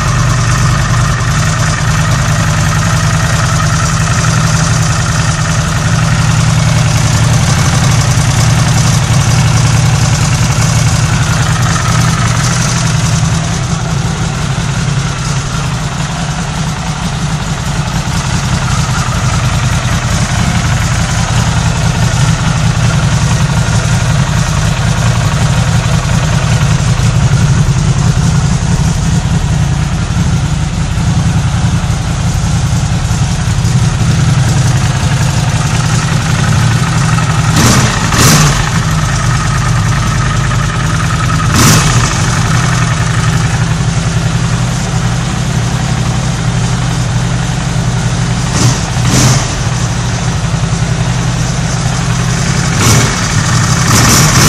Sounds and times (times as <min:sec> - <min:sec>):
Medium engine (mid frequency): 0:00.0 - 0:54.4
Motorcycle: 0:00.0 - 0:54.4.